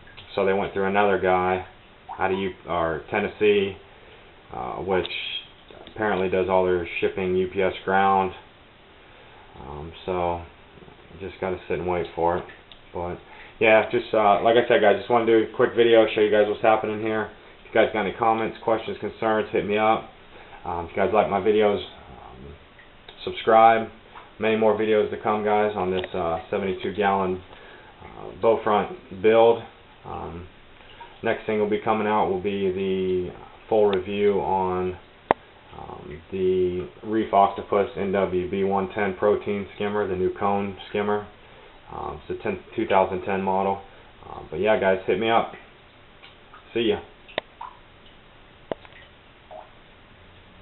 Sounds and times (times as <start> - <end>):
Water: 0.0 - 50.6
Speech: 0.3 - 3.8, 4.5 - 8.5, 9.6 - 30.5, 31.2 - 35.0, 35.7 - 45.6, 46.7 - 47.1.